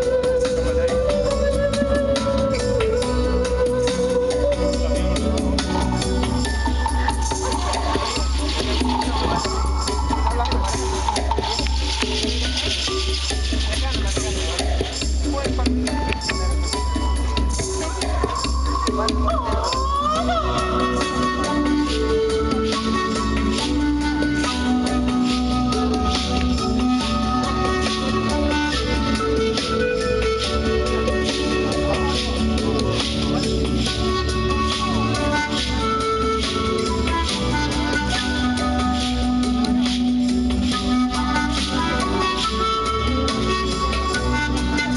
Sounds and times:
Traditional music: 0:00.0 - 0:44.9
Speech: 0:13.6 - 0:16.9, 0:17.7 - 0:20.8.

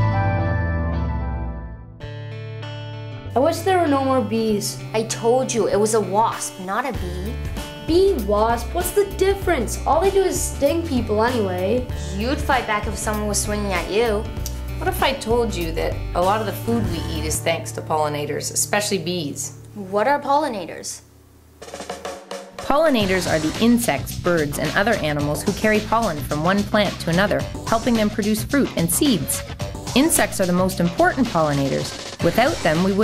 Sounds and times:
Music: 0:00.0 - 0:33.0
Child speech, kid speaking: 0:03.4 - 0:14.2, 0:14.8 - 0:21.0.

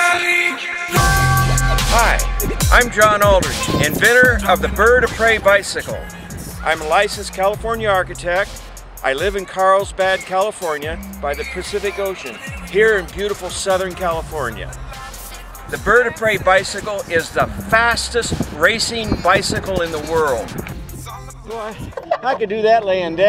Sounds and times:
Music: 0:00.0 - 0:22.0
Speech: 0:01.9 - 0:06.0, 0:06.6 - 0:14.7, 0:15.7 - 0:20.5, 0:21.5 - 0:23.2.

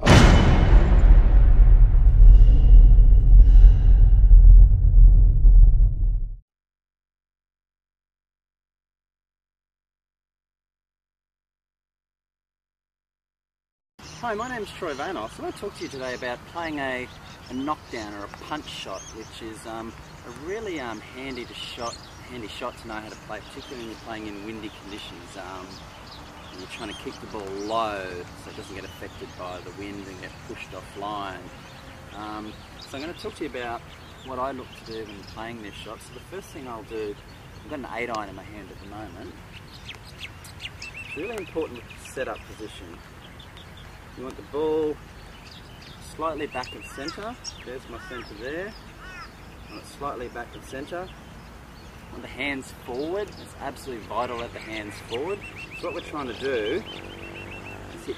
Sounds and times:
Speech: 0:14.2 - 0:25.8, 0:26.6 - 0:31.5, 0:32.1 - 0:39.4, 0:41.1 - 0:43.0, 0:44.2 - 0:45.0, 0:46.0 - 0:48.8, 0:49.7 - 0:51.1, 0:52.1 - 0:56.9, 0:57.9 - 0:58.1.

